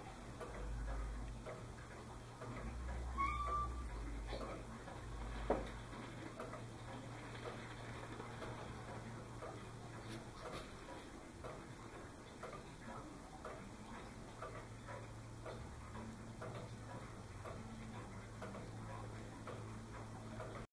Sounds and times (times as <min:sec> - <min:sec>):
Tick-tock: 0:14.4 - 0:20.7.